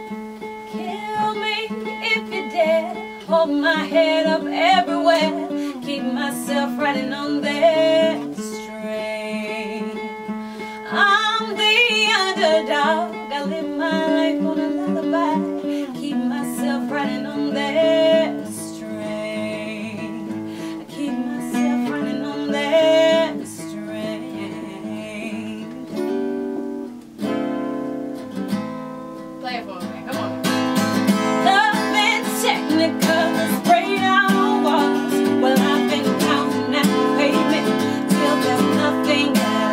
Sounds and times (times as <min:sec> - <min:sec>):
Music: 0:00.0 - 0:39.7.